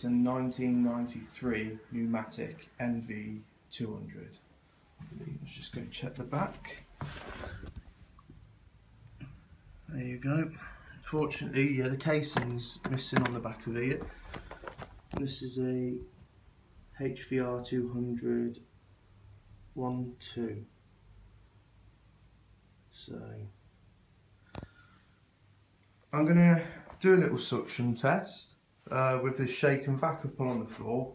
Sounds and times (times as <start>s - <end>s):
Speech: 0.0s - 4.4s, 5.0s - 6.9s, 9.9s - 14.1s, 15.1s - 16.2s, 16.9s - 18.7s, 19.7s - 20.8s, 22.9s - 23.6s, 26.1s - 31.1s.